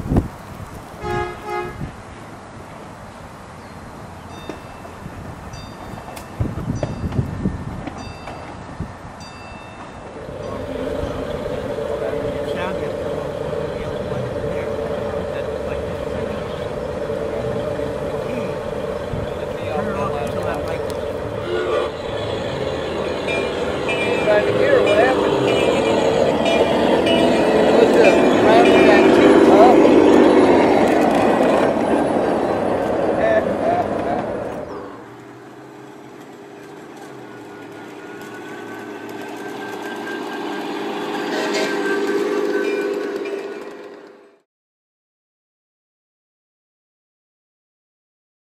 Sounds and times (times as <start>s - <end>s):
Speech: 19.4s - 20.9s, 33.2s - 34.4s.